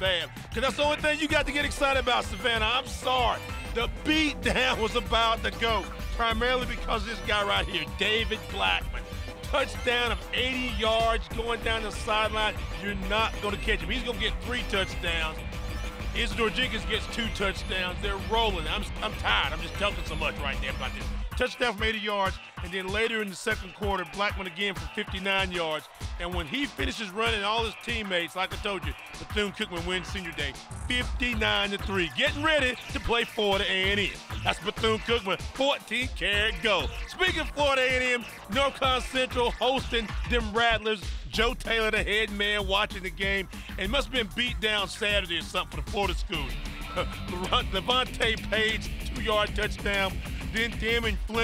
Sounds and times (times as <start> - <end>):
Speech: 0.0 - 15.4, 16.2 - 51.4
Music: 0.0 - 51.4.